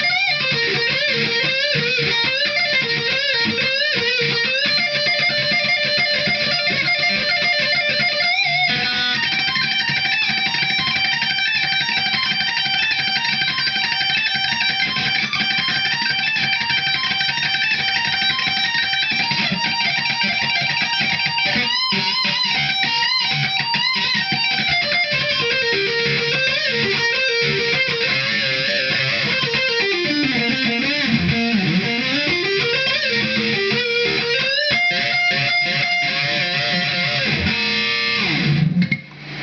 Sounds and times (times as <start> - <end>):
Bass guitar: 24.1 - 39.4.